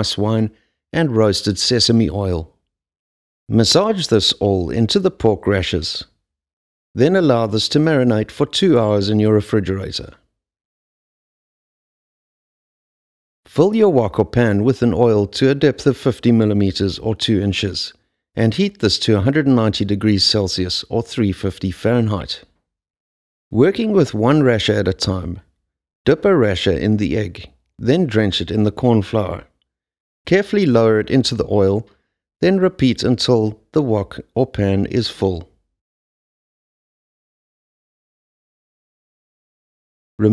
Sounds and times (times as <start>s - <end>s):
Speech: 0.0s - 2.6s, 3.5s - 6.2s, 7.0s - 10.2s, 13.5s - 22.5s, 23.5s - 25.5s, 26.1s - 29.6s, 30.3s - 35.6s.